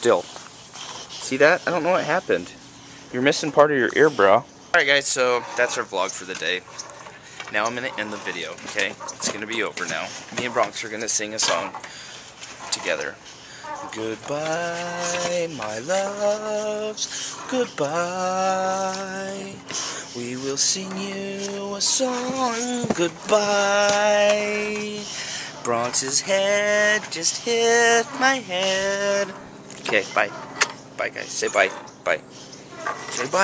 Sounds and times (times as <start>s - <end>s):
Outside, rural or natural: 0.0s - 33.4s.